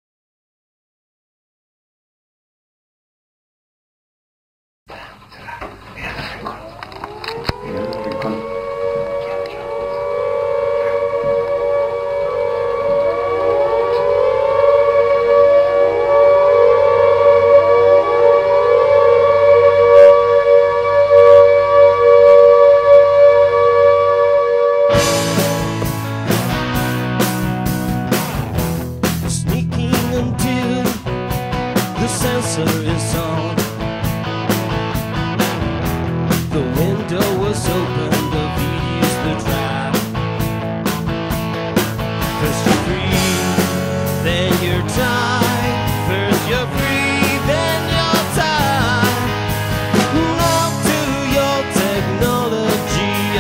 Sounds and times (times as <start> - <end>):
Siren: 6.6 - 27.4, 42.4 - 53.4.